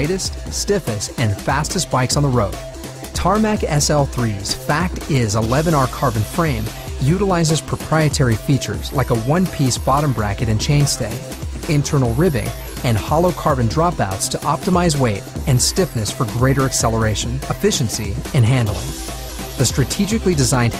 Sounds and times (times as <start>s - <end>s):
Speech: 0.0s - 19.0s, 19.6s - 20.7s
Music: 0.0s - 20.7s.